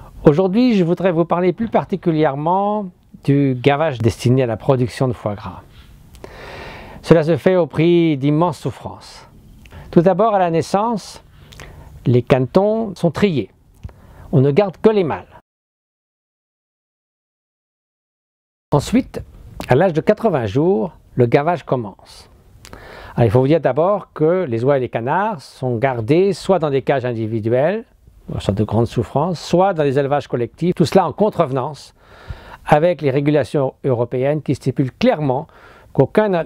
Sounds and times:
Speech: 0.2s - 5.7s, 7.0s - 9.3s, 9.9s - 11.2s, 12.0s - 13.5s, 14.3s - 15.4s, 18.8s - 22.3s, 23.2s - 32.0s, 32.6s - 36.4s.

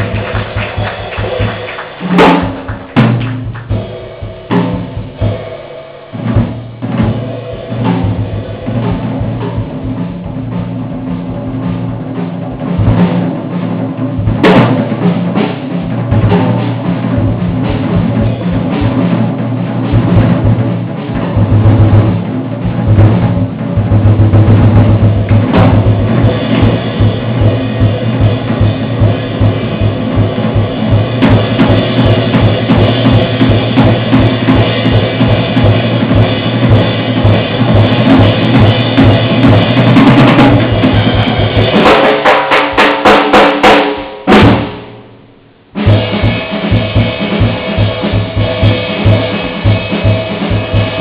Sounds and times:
Jazz: 0.0s - 42.2s.

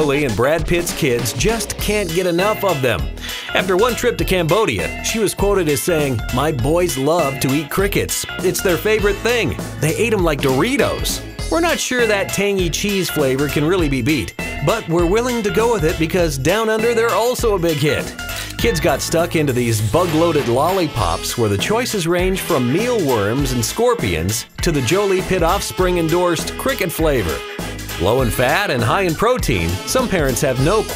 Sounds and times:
Speech: 0.0s - 27.4s, 28.0s - 30.9s
Music: 0.0s - 30.9s.

